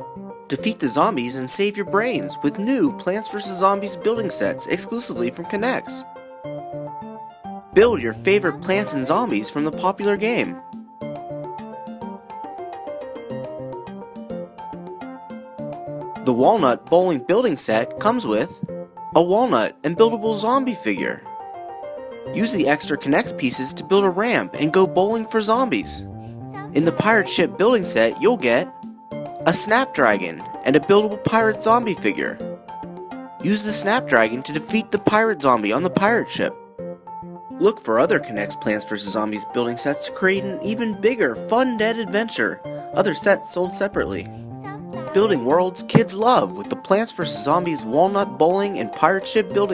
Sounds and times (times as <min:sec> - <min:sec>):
Music: 0:00.0 - 0:49.7
Speech: 0:00.5 - 0:06.0, 0:07.8 - 0:10.6, 0:16.3 - 0:21.2, 0:22.4 - 0:26.0, 0:26.6 - 0:28.7, 0:29.5 - 0:32.4, 0:33.4 - 0:36.5, 0:37.6 - 0:44.3, 0:45.0 - 0:49.7.